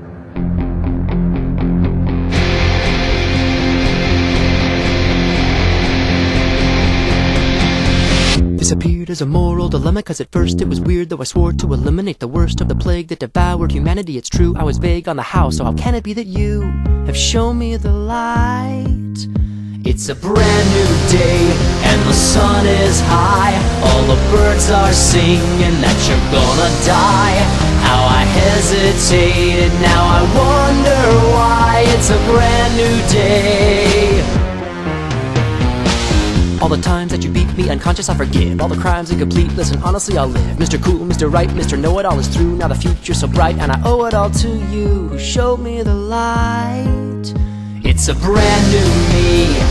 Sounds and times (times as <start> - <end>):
Music: 0.0 - 49.7
Male singing: 8.6 - 19.3, 19.9 - 34.4, 36.6 - 49.7.